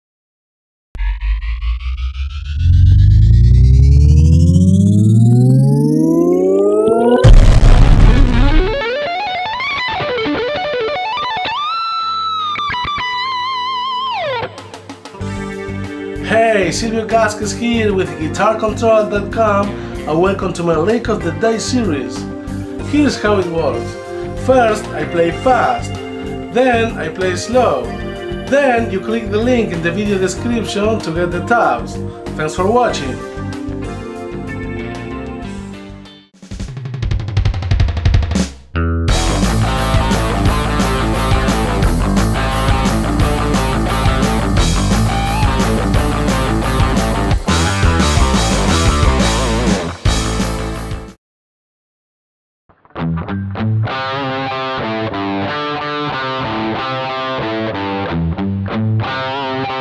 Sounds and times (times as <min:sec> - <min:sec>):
Electric guitar: 0:01.0 - 0:16.2, 0:38.8 - 0:50.4, 0:52.8 - 0:59.8.